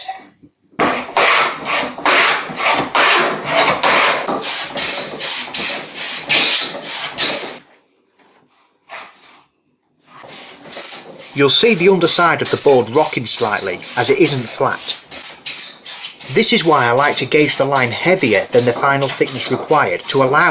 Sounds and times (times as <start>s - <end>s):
Speech: 11.4s - 15.0s, 16.3s - 20.5s.